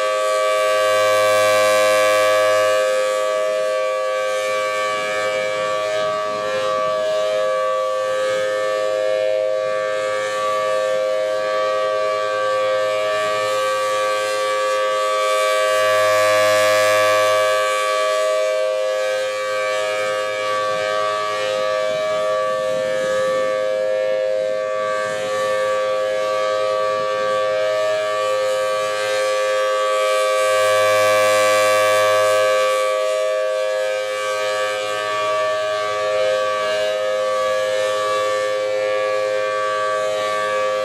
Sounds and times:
Siren: 0.0 - 40.8.

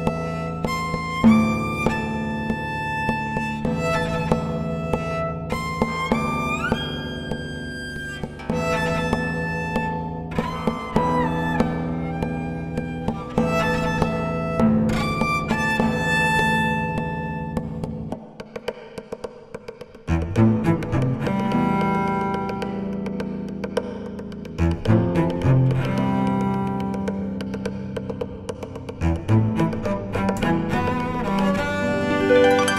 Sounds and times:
Music: 0.0 - 32.7.

